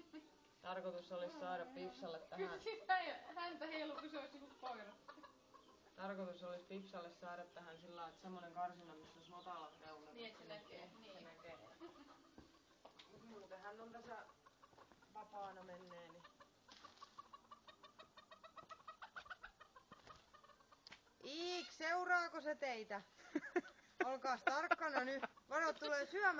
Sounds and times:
Fowl: 3.7s - 6.1s, 10.3s - 12.8s, 14.1s - 21.8s
Speech: 24.0s - 26.3s.

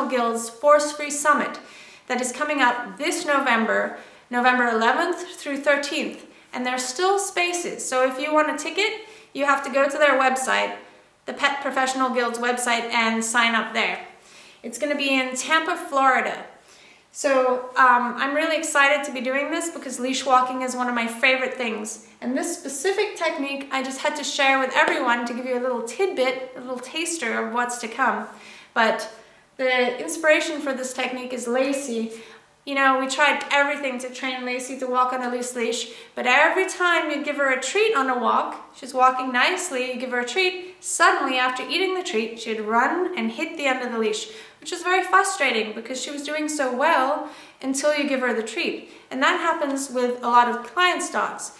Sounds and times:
Speech: 0.0s - 16.6s, 17.2s - 51.5s.

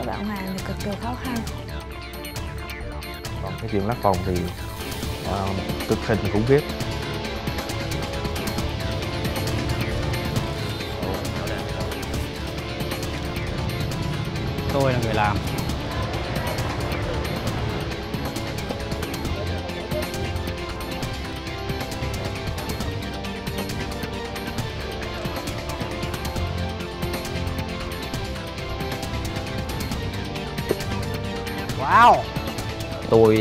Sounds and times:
Music: 0.0s - 33.4s.

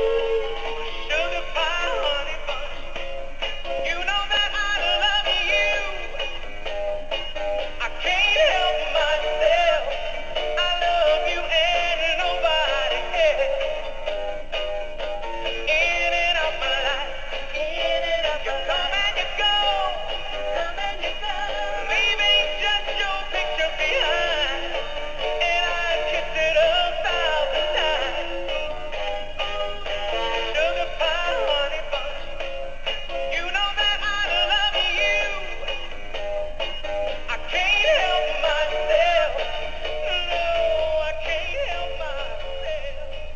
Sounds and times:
Music: 0.0s - 43.3s
Male singing: 1.1s - 2.9s, 3.8s - 6.4s, 7.8s - 13.8s, 15.7s - 28.6s, 30.4s - 32.3s, 33.3s - 35.9s, 37.3s - 43.3s.

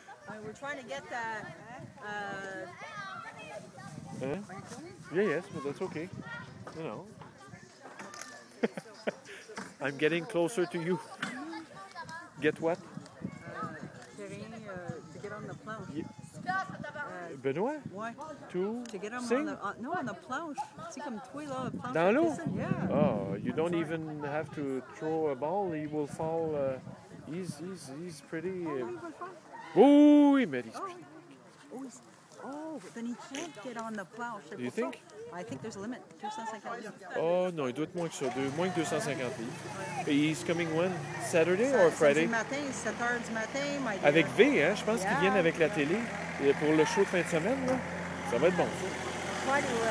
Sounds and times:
Vehicle: 38.0s - 49.9s.

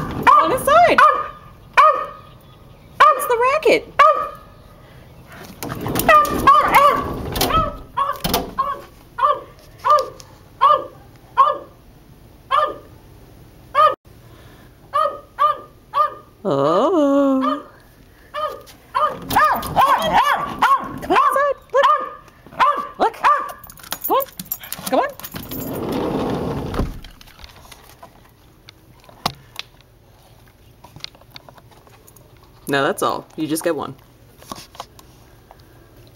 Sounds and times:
Bark: 0.2s - 2.2s, 3.0s - 3.4s, 4.0s - 4.5s, 6.1s - 11.8s, 12.5s - 12.9s, 13.8s - 14.0s, 14.9s - 16.3s, 17.4s - 17.7s, 18.4s - 24.3s
Bow-wow: 0.2s - 2.2s, 4.0s - 4.4s, 6.1s - 11.8s, 12.5s - 12.9s, 13.8s - 14.0s, 14.9s - 16.3s, 18.4s - 23.6s
Yip: 0.2s - 2.2s, 4.0s - 4.4s, 7.6s - 11.8s, 12.5s - 12.9s, 13.8s - 14.0s, 14.9s - 16.3s, 18.4s - 23.6s.

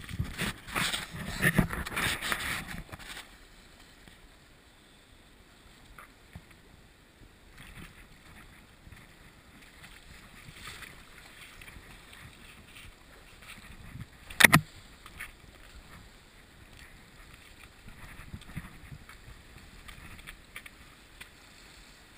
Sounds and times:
Stream: 0.0s - 22.1s.

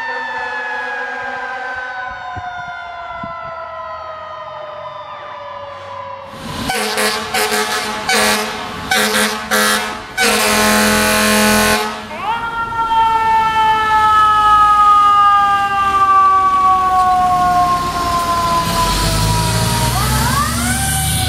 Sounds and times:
Fire engine, fire truck (siren): 0.0s - 21.2s.

